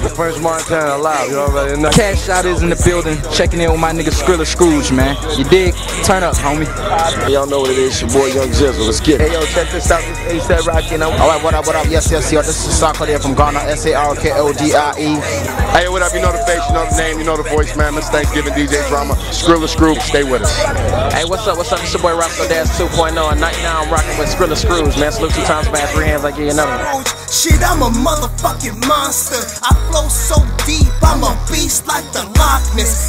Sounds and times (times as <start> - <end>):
Speech: 0.0 - 27.0
Pop music: 0.0 - 33.0.